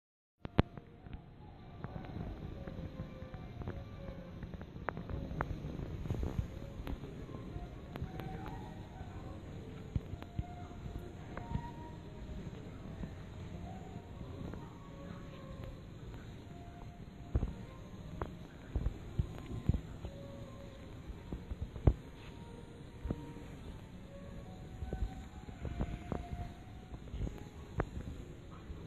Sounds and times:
Music: 0.4 - 28.8.

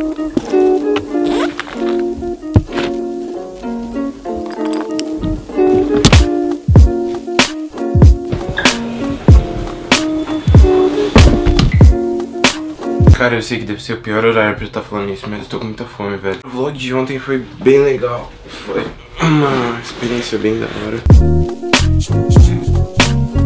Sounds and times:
Music: 0.0 - 15.2, 21.0 - 23.4.

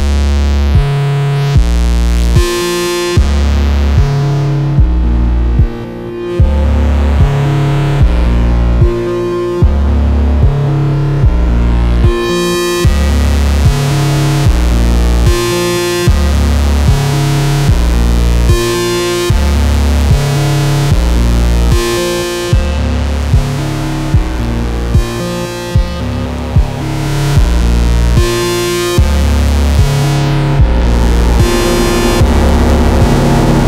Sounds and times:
Sampler: 0.0 - 33.6.

